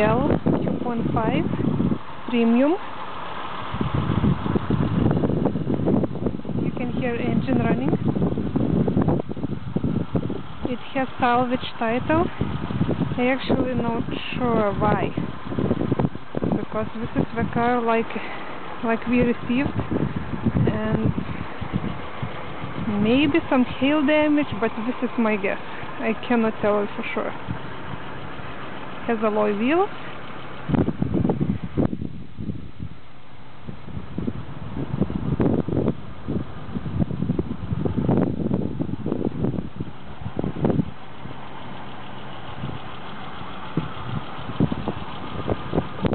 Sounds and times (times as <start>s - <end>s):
Speech: 0.0s - 1.6s, 2.3s - 2.8s, 6.6s - 8.0s, 10.7s - 12.3s, 13.2s - 15.3s, 16.6s - 19.8s, 20.7s - 21.2s, 22.9s - 27.4s, 29.1s - 29.9s.